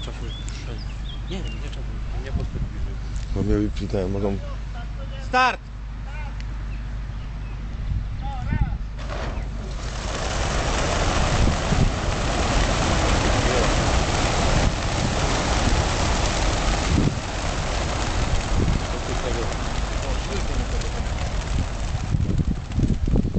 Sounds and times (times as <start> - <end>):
Speech: 0.0 - 6.4, 8.2 - 8.8, 18.9 - 21.1
Outside, rural or natural: 0.0 - 23.3.